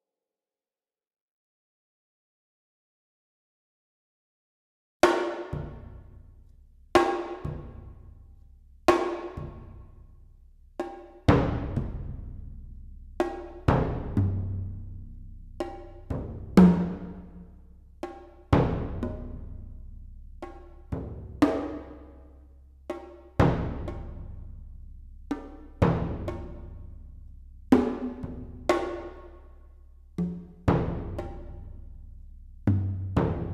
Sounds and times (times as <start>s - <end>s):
Percussion: 5.0s - 33.5s.